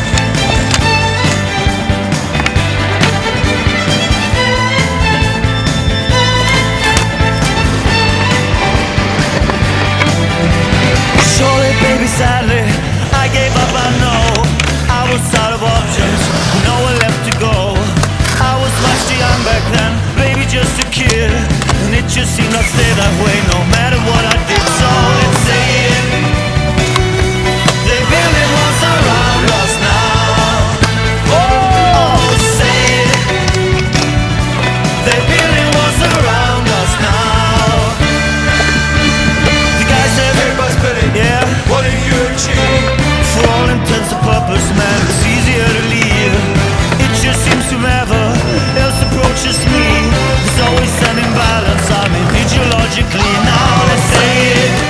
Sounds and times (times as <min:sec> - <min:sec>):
Music: 0:00.0 - 0:54.9
Skateboard: 0:00.0 - 0:54.9.